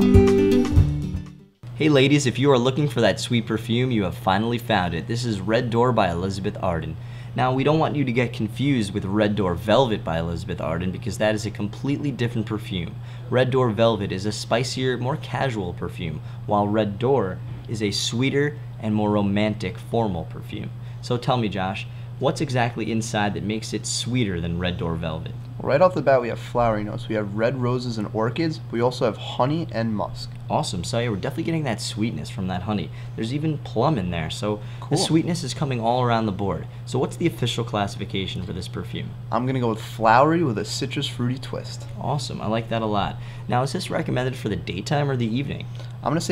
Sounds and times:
Speech: 1.8s - 46.3s.

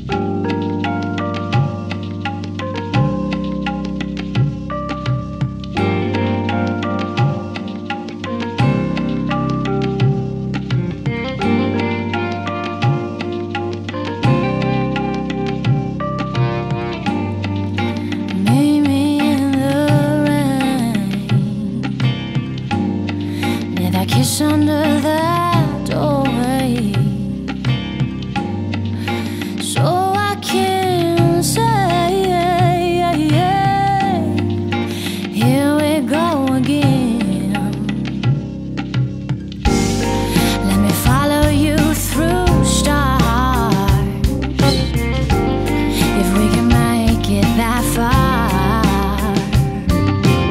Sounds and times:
Music: 0.0s - 50.5s.

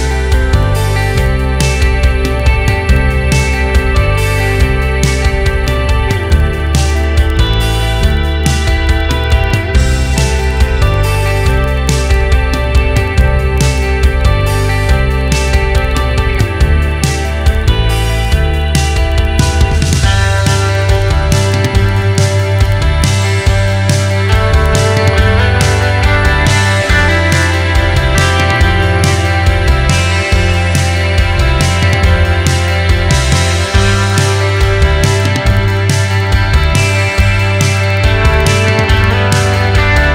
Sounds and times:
Music: 0.0s - 40.1s.

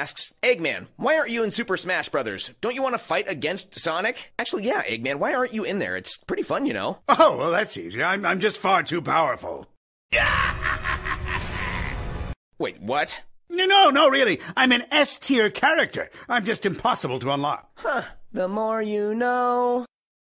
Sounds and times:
Speech: 0.0s - 9.7s, 12.6s - 19.9s.

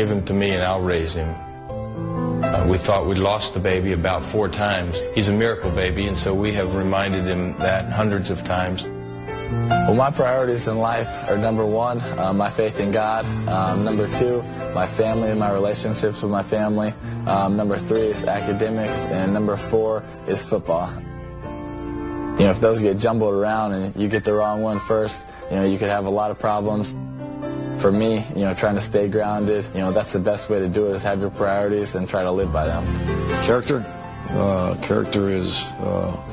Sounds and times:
Male speech, man speaking: 0.0s - 1.4s, 2.5s - 8.9s, 9.9s - 21.0s, 22.4s - 27.0s, 27.8s - 36.3s
Music: 0.0s - 36.3s.

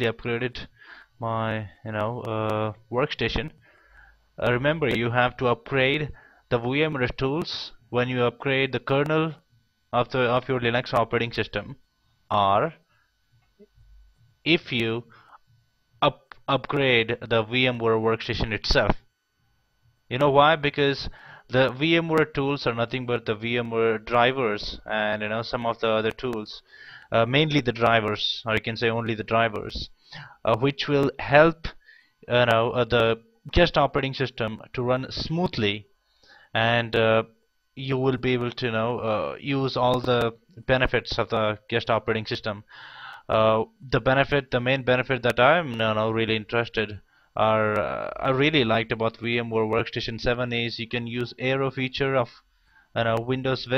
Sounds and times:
Speech: 0.0s - 3.6s, 4.4s - 12.9s, 14.5s - 15.1s, 16.0s - 19.1s, 20.1s - 35.9s, 36.6s - 52.4s, 53.0s - 53.7s.

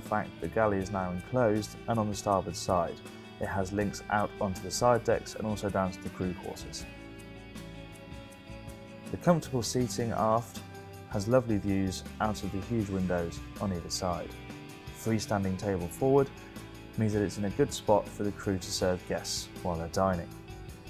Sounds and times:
Speech: 0.0s - 6.9s, 9.1s - 14.3s, 15.0s - 16.3s, 17.0s - 20.3s
Music: 0.0s - 20.8s.

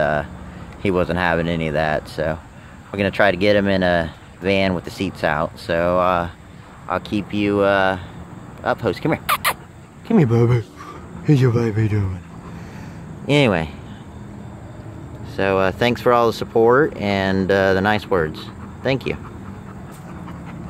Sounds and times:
Speech: 0.0s - 8.0s, 10.1s - 10.7s, 11.3s - 12.2s, 13.3s - 13.8s, 15.3s - 19.2s.

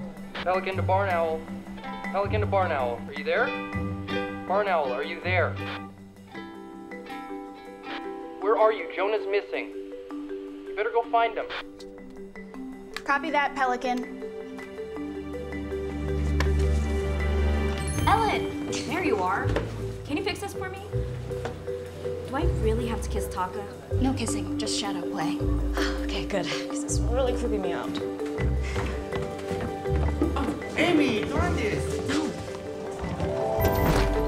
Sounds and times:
Music: 0.0s - 34.2s.

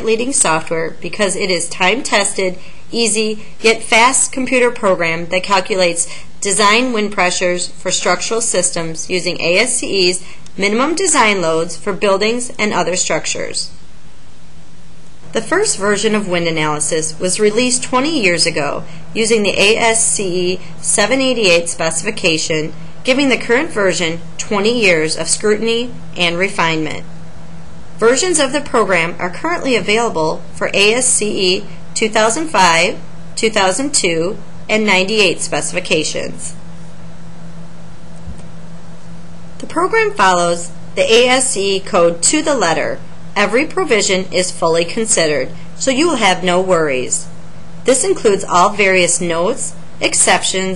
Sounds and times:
Speech: 0.0s - 13.8s, 15.3s - 27.0s, 28.0s - 36.6s, 39.6s - 47.3s, 47.9s - 50.7s.

